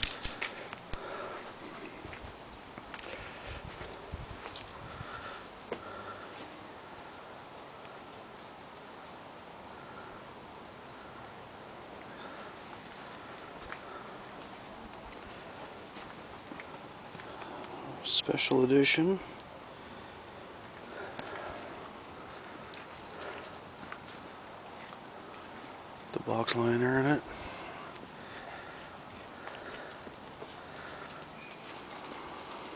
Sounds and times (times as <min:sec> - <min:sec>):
Speech: 0:18.0 - 0:19.4, 0:26.1 - 0:27.3.